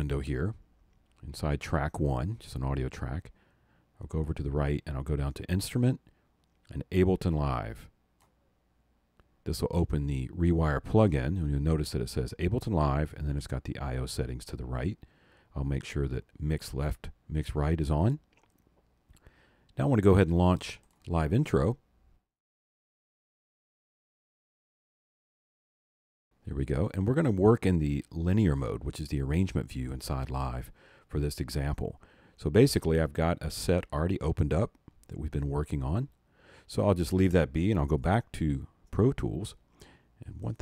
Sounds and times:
Speech: 0.0 - 0.6, 1.2 - 3.4, 4.0 - 6.1, 6.7 - 7.9, 9.4 - 18.3, 19.8 - 21.8, 26.4 - 39.6, 40.2 - 40.6.

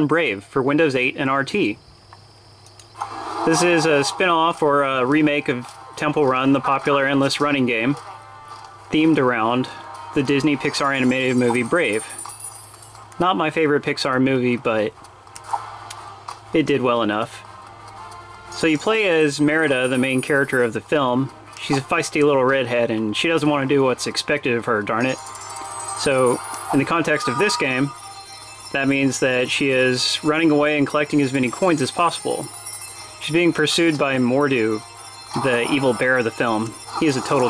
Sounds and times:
Speech: 0.0 - 1.8, 3.5 - 8.0, 8.9 - 12.1, 13.2 - 15.0, 16.5 - 17.4, 18.6 - 25.2, 26.0 - 28.0, 28.8 - 32.5, 33.2 - 34.8, 35.4 - 37.4
Music: 3.0 - 13.6, 14.3 - 37.4.

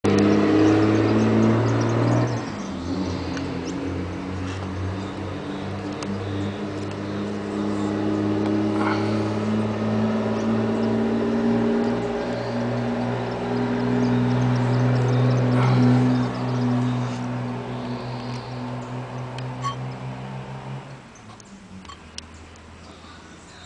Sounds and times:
Car: 0.0 - 23.6
Outside, urban or manmade: 0.0 - 23.6.

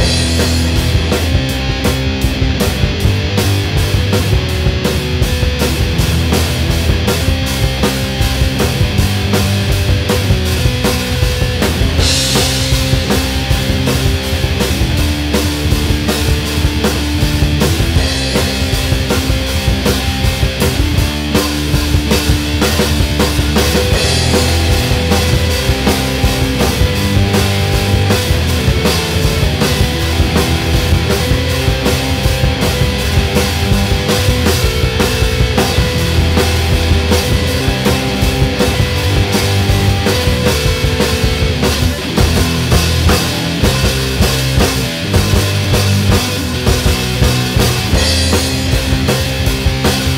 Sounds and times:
Electric guitar: 0.0 - 50.1.

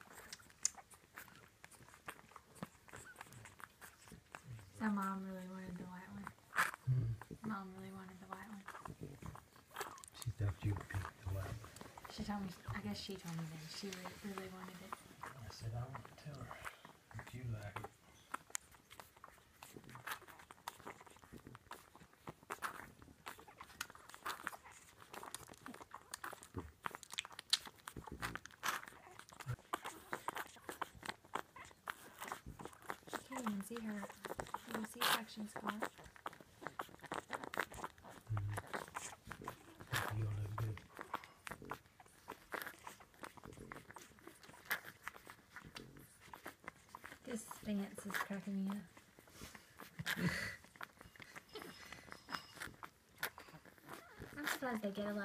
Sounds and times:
Dog: 0.0 - 7.5, 8.1 - 55.2
Speech: 4.8 - 6.3, 6.9 - 9.2, 10.2 - 17.9, 33.2 - 35.8, 40.0 - 40.8, 47.3 - 48.9, 54.4 - 55.2.

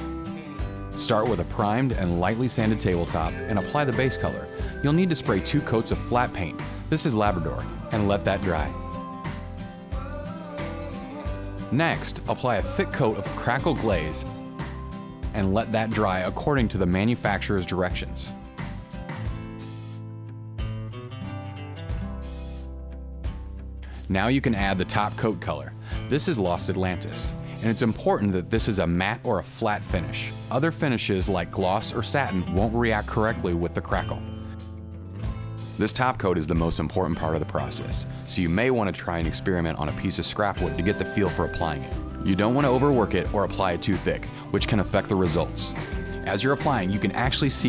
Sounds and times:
Music: 0.0 - 47.6
Speech: 1.0 - 8.8, 11.7 - 14.3, 15.3 - 18.3, 24.0 - 34.3, 35.8 - 47.6.

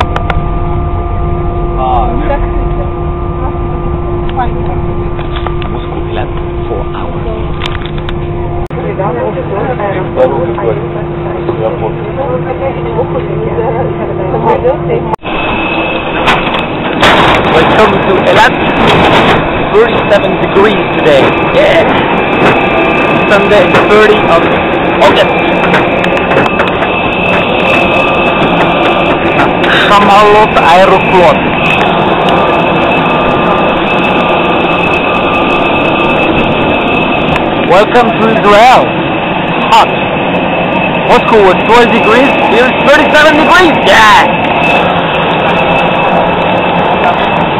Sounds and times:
Jet engine: 0.0 - 47.5.

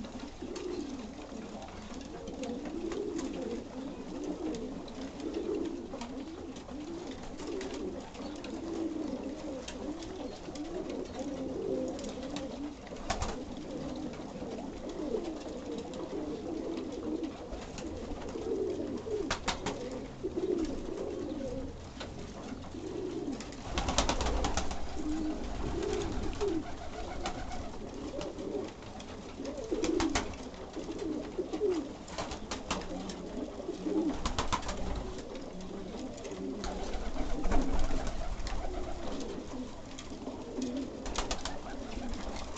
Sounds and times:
Pigeon, dove: 0.0 - 42.5.

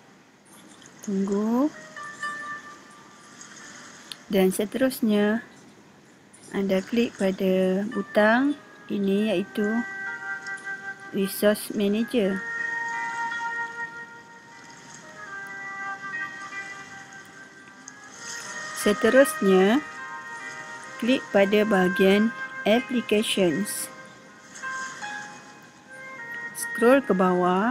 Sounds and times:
Music: 1.0 - 5.6, 6.4 - 27.7
Speech: 1.1 - 1.8, 4.3 - 5.5, 6.6 - 9.8, 11.2 - 12.4, 18.8 - 19.8, 21.0 - 23.9, 26.6 - 27.7.

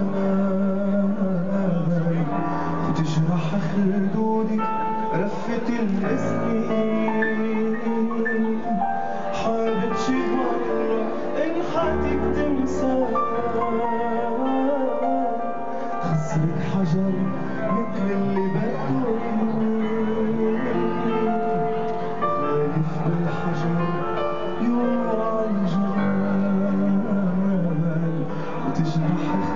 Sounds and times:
Male singing: 0.0 - 29.5
Music: 0.0 - 29.5.

